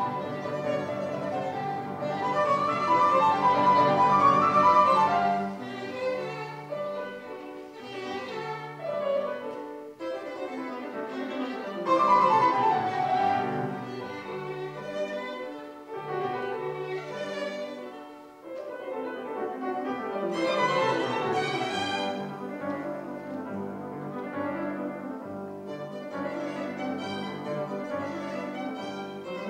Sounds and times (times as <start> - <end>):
Violin, fiddle: 0.0 - 29.4.